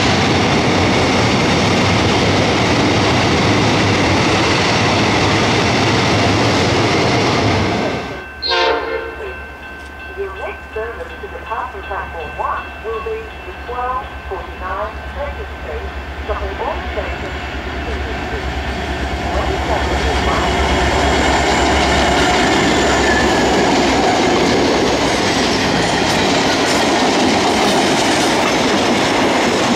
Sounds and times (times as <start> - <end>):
Railroad car, train wagon: 0.0 - 29.7
Train: 0.0 - 29.7
Clickety-clack: 23.9 - 29.7.